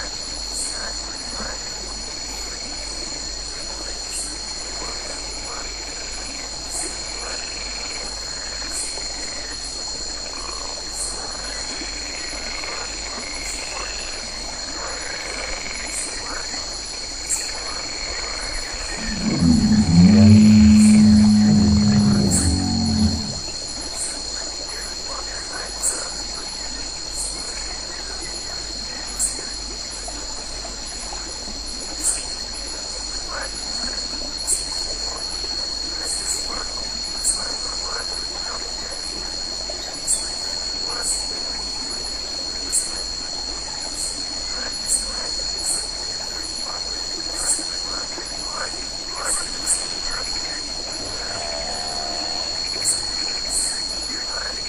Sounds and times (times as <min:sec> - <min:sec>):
Animal: 0:18.5 - 0:23.5, 0:51.0 - 0:53.4.